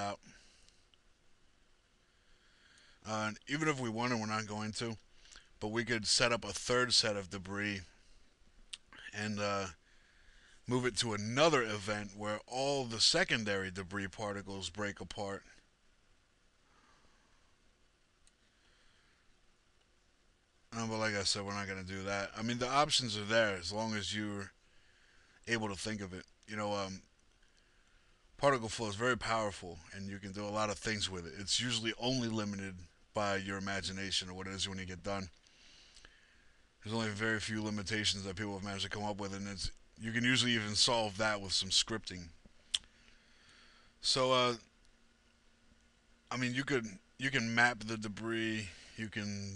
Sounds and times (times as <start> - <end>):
Speech: 0.0 - 0.2, 3.1 - 5.0, 5.6 - 8.0, 9.0 - 9.8, 10.7 - 15.6, 20.7 - 24.6, 25.5 - 27.1, 28.4 - 35.3, 36.8 - 42.4, 44.0 - 44.7, 46.3 - 49.5.